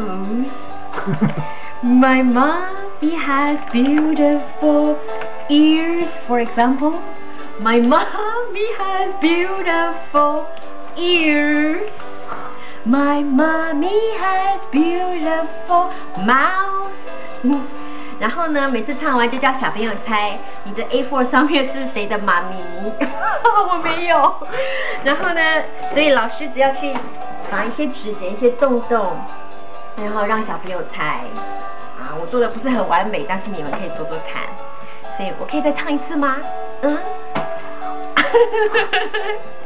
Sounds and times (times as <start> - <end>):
Music: 0.0 - 39.6.